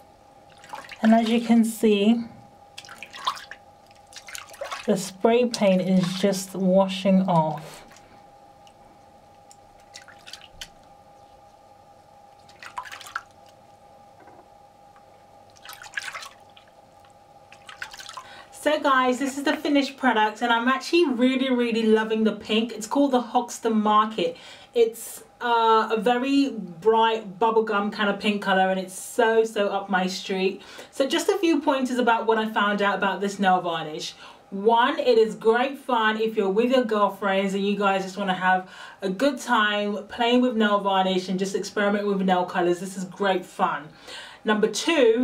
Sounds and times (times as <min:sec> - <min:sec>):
Inside, small room: 0:00.0 - 0:45.2
Speech: 0:01.0 - 0:02.4, 0:04.9 - 0:07.8, 0:18.6 - 0:43.9, 0:44.5 - 0:45.2.